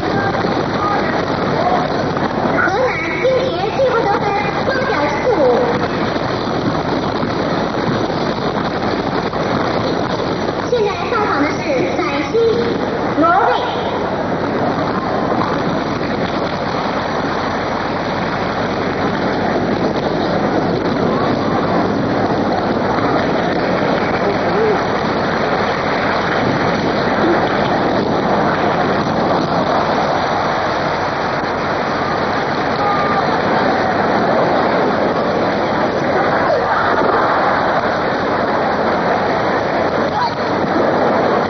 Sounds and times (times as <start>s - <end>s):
Speech: 2.6s - 5.8s, 10.7s - 13.8s.